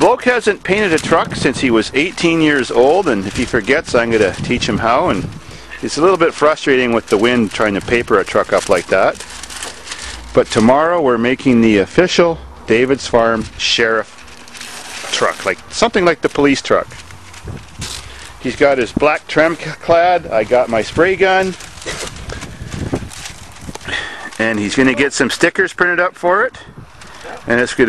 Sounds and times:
Speech: 0:00.0 - 0:09.2, 0:10.4 - 0:14.1, 0:15.1 - 0:16.9, 0:18.4 - 0:21.6, 0:24.3 - 0:26.7, 0:27.5 - 0:27.8.

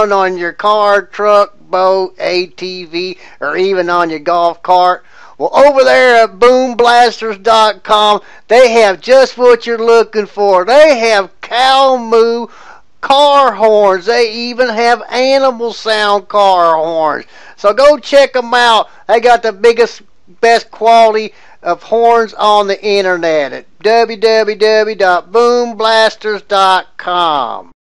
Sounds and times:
Speech: 0:00.0 - 0:27.8.

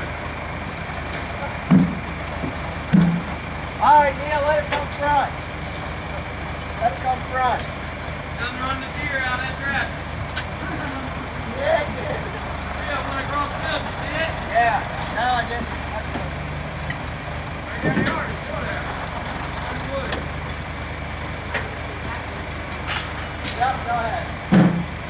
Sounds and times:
Truck: 0:00.0 - 0:25.1
Speech: 0:03.8 - 0:05.4, 0:06.8 - 0:07.7, 0:08.4 - 0:10.0, 0:11.5 - 0:16.4, 0:17.7 - 0:19.0, 0:19.6 - 0:20.3, 0:23.5 - 0:24.3.

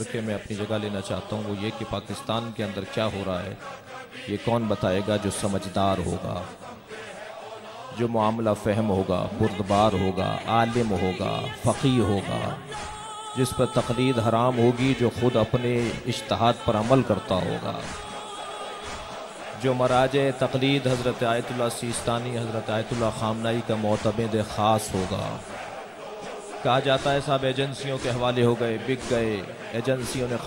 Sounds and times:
Male speech, man speaking: 0:00.0 - 0:03.6, 0:04.2 - 0:06.6, 0:07.9 - 0:12.8, 0:13.4 - 0:18.0, 0:19.6 - 0:25.5, 0:26.6 - 0:30.4
Narration, monologue: 0:00.0 - 0:30.4
Music: 0:09.4 - 0:30.4.

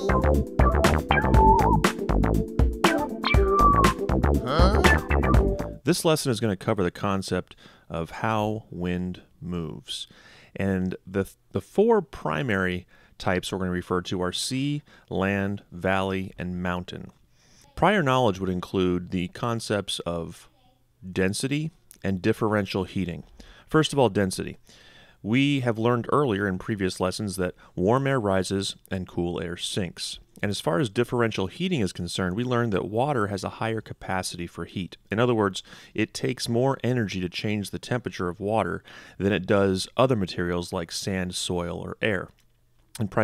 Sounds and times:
Speech: 0:04.4 - 0:05.0, 0:05.8 - 0:24.6, 0:25.2 - 0:42.4, 0:43.0 - 0:43.2.

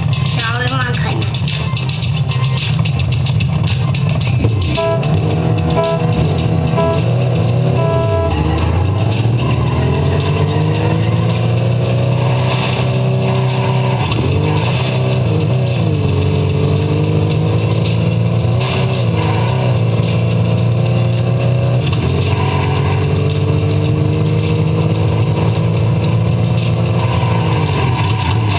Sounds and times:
Car: 0:00.0 - 0:28.5
Music: 0:00.0 - 0:28.5.

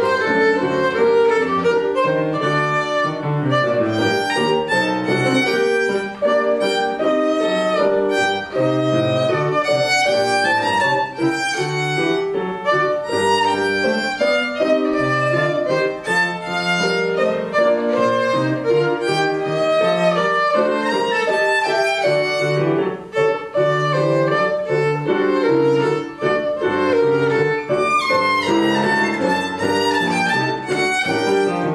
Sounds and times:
Violin, fiddle: 0:00.0 - 0:31.7.

